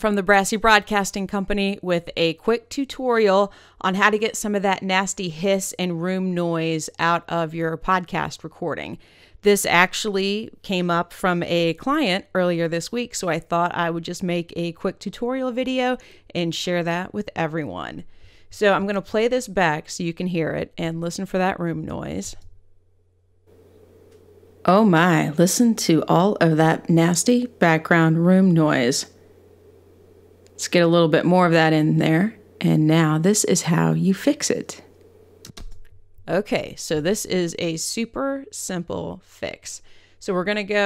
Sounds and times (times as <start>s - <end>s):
Speech: 0.0s - 18.0s, 18.6s - 22.4s, 24.7s - 29.1s, 30.6s - 34.8s, 36.3s - 40.8s.